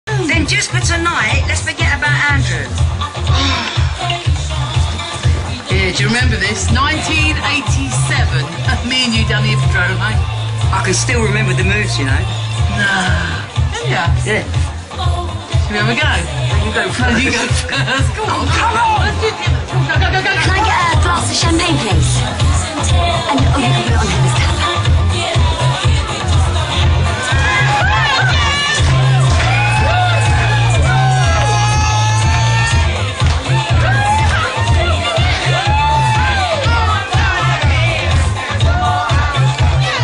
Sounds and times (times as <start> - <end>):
Music: 0.0 - 40.0.